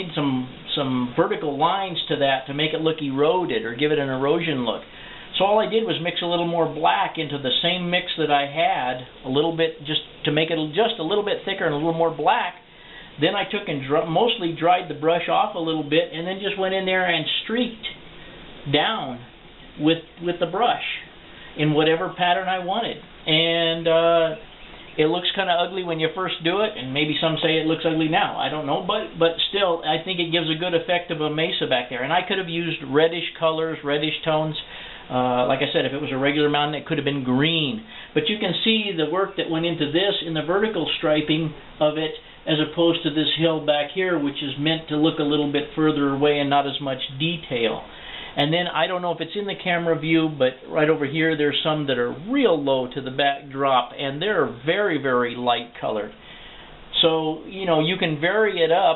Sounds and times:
Speech: 0:00.0 - 0:18.0, 0:18.6 - 0:56.2, 0:56.9 - 0:58.9
Inside, small room: 0:00.0 - 0:58.9.

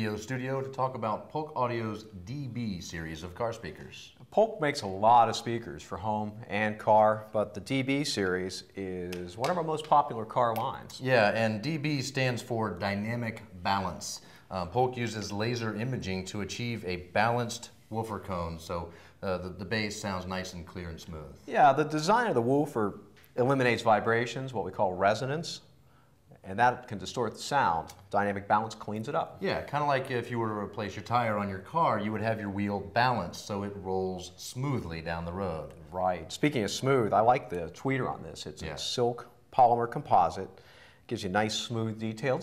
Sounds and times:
Speech: 0:00.0 - 0:25.7, 0:26.3 - 0:42.4.

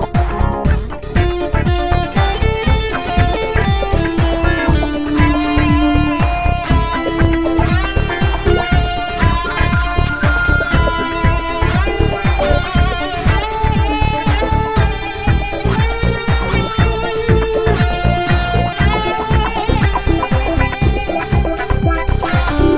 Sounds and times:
Electric guitar: 0:00.0 - 0:22.7.

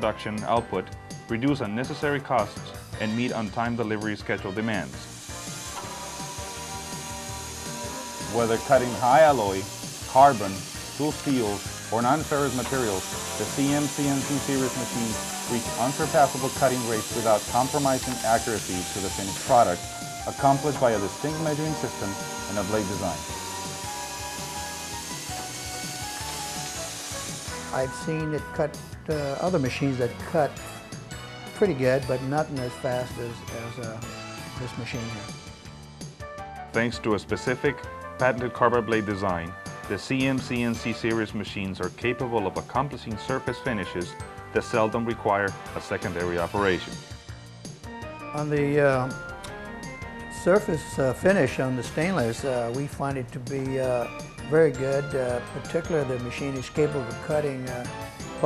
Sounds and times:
Sawing: 0:04.4 - 0:28.4, 0:45.8 - 0:47.0.

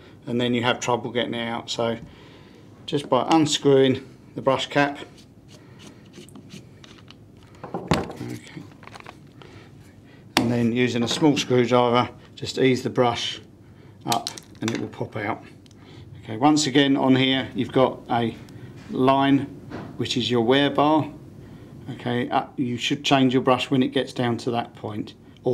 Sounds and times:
Speech: 0:00.2 - 0:02.0, 0:02.9 - 0:05.1, 0:08.2 - 0:08.6, 0:10.4 - 0:15.5, 0:16.2 - 0:21.2, 0:21.9 - 0:25.5.

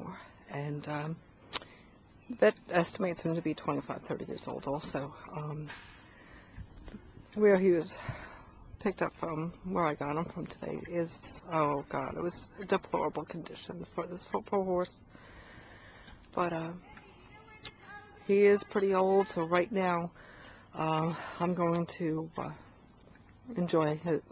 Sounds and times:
Speech: 0:02.3 - 0:05.7, 0:07.4 - 0:08.0, 0:08.8 - 0:15.0, 0:16.4 - 0:20.1, 0:23.5 - 0:24.3.

